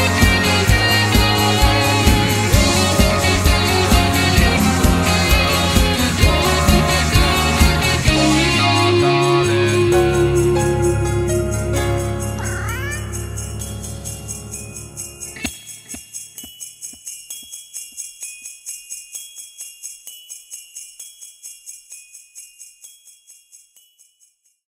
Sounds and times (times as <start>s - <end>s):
Christmas music: 0.0s - 24.0s.